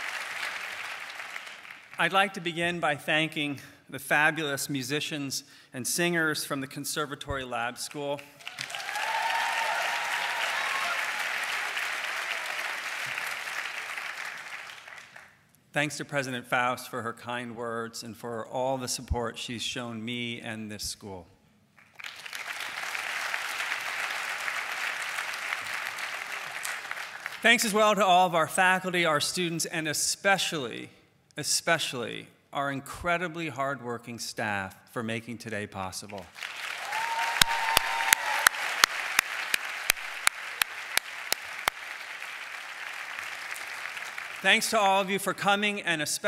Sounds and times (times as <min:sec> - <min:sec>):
Narration, monologue: 0:01.8 - 0:08.5, 0:15.3 - 0:21.8, 0:27.2 - 0:36.4, 0:44.4 - 0:46.2
Male speech, man speaking: 0:02.0 - 0:08.2, 0:15.8 - 0:21.3, 0:27.4 - 0:36.3, 0:44.4 - 0:46.2.